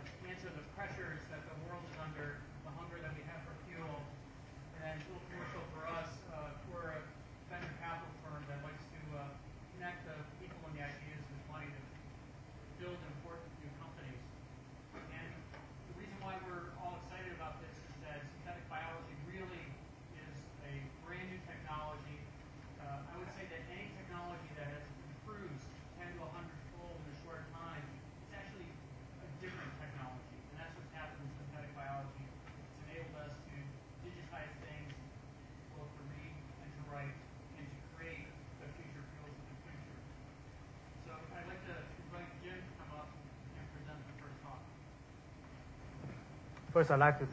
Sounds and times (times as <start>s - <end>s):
Speech: 0.0s - 12.0s, 12.7s - 40.1s, 41.0s - 44.7s, 46.7s - 47.3s.